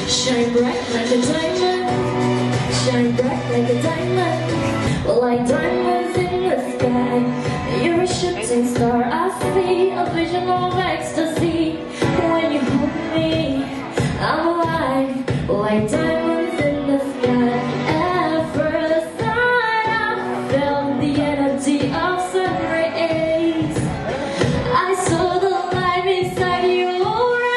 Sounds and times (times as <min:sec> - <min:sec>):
Inside, large room or hall: 0:00.0 - 0:27.5
Music: 0:00.0 - 0:27.5.